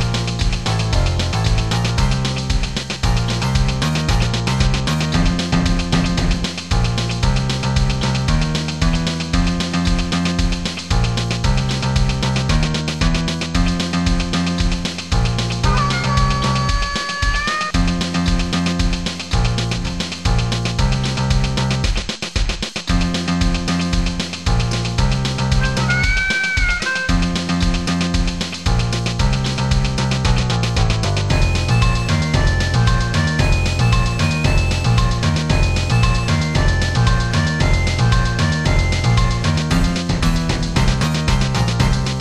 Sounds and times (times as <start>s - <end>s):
Video game music: 0.0s - 42.2s.